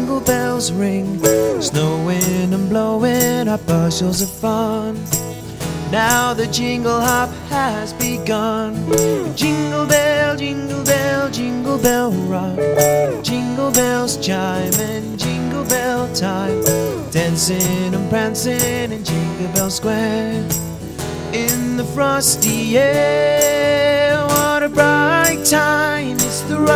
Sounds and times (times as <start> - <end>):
Music: 0.0 - 26.7.